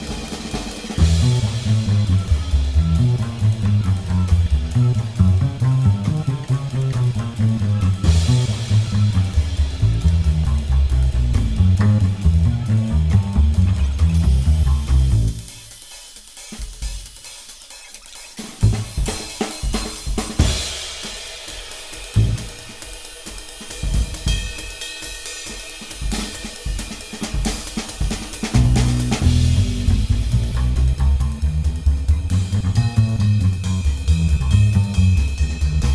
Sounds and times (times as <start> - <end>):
Hi-hat: 0.0 - 35.9
Snare drum: 0.0 - 35.9.